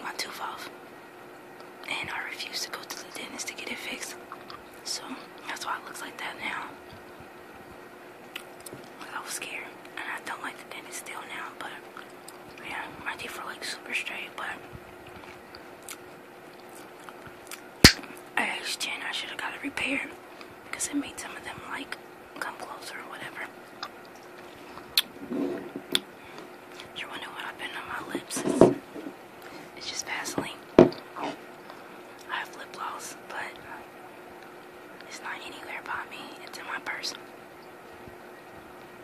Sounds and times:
Chewing, mastication: 4.3s - 4.8s, 15.0s - 18.3s.

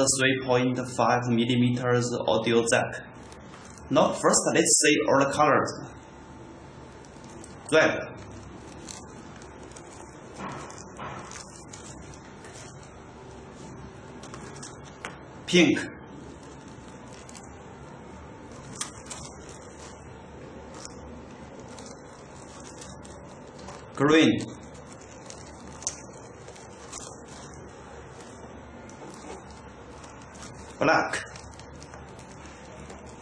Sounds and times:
Speech: 0.0s - 3.1s, 3.9s - 6.0s, 7.7s - 8.2s, 15.5s - 16.0s, 24.0s - 24.6s, 30.8s - 31.4s.

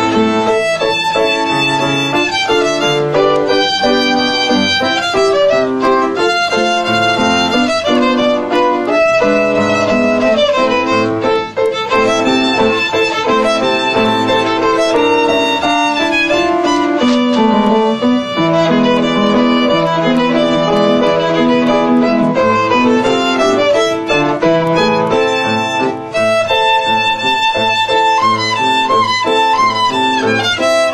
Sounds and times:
Violin, fiddle: 0.0s - 30.9s.

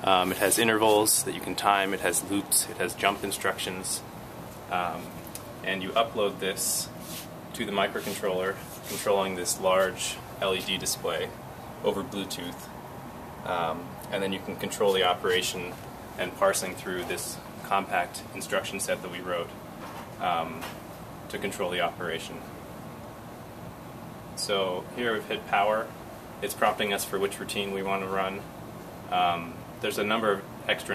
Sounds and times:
Speech: 0.0s - 4.1s, 4.7s - 12.7s, 13.4s - 19.6s, 20.2s - 22.5s, 24.4s - 28.5s, 29.1s - 30.9s.

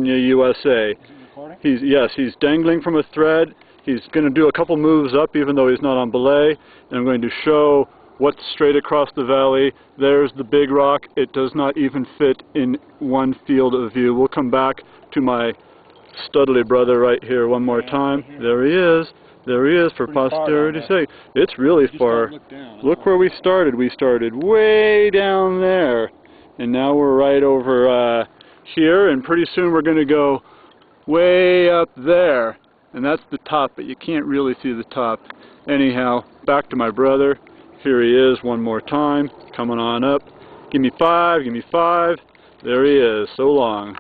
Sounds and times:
Speech: 0.0s - 15.6s, 16.2s - 30.4s, 31.1s - 44.0s.

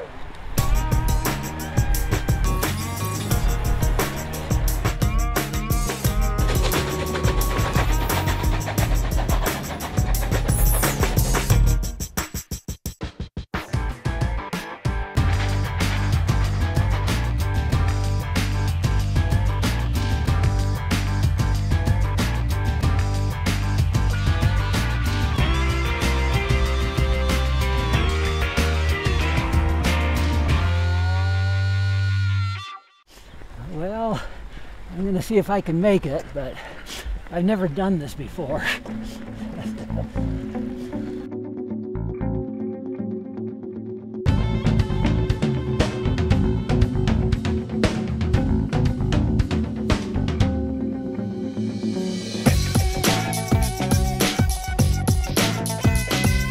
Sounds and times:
Music: 0.6s - 33.1s, 38.6s - 56.5s.

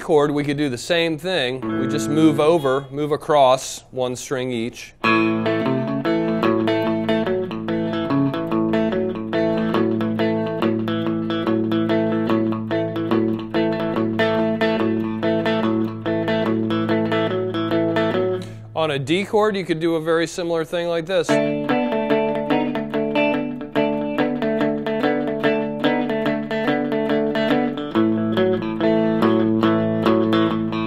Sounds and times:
Speech: 0.0s - 5.0s, 18.8s - 21.5s
Guitar: 0.0s - 30.8s.

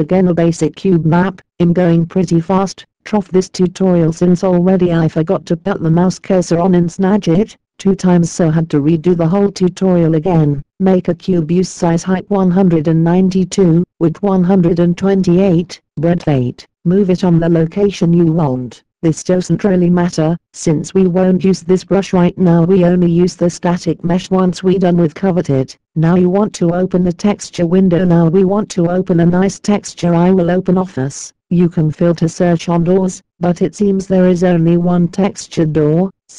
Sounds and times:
Speech: 0.0s - 36.3s.

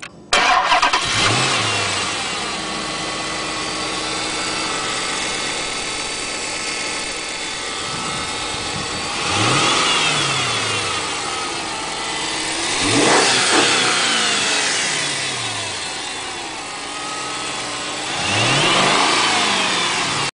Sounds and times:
Car: 0.0s - 20.3s
Medium engine (mid frequency): 0.0s - 20.3s
Idling: 0.4s - 20.3s
Accelerating, revving, vroom: 1.0s - 2.3s, 9.2s - 11.2s, 12.5s - 15.8s, 18.0s - 20.3s.

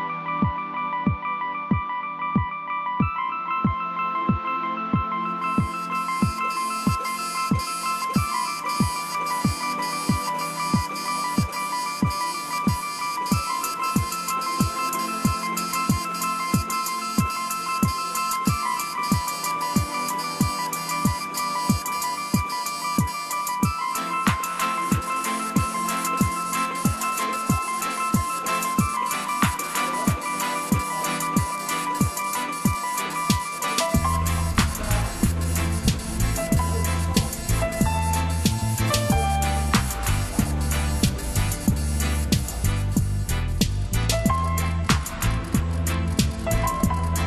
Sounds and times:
Music: 0.0s - 47.2s
Printer: 5.5s - 42.8s, 44.6s - 47.2s.

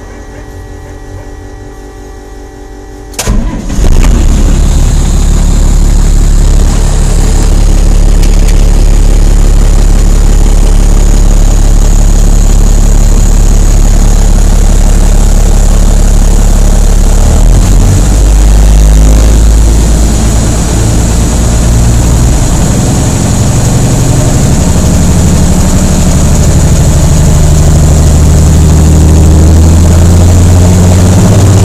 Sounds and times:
Truck: 0.0s - 31.6s.

